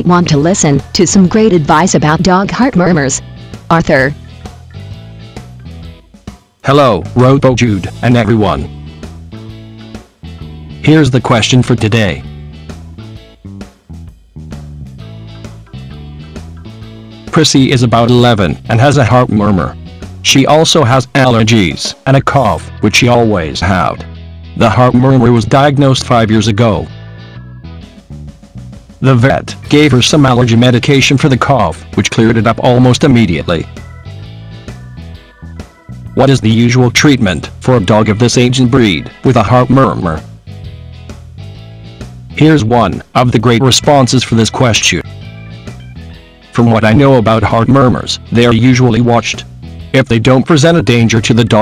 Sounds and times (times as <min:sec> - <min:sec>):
Speech: 0:00.0 - 0:04.2, 0:06.7 - 0:08.7, 0:10.8 - 0:12.3, 0:17.3 - 0:27.0, 0:29.0 - 0:33.7, 0:36.2 - 0:40.3, 0:42.4 - 0:45.1, 0:46.6 - 0:49.4, 0:50.0 - 0:51.6
Music: 0:00.0 - 0:51.6.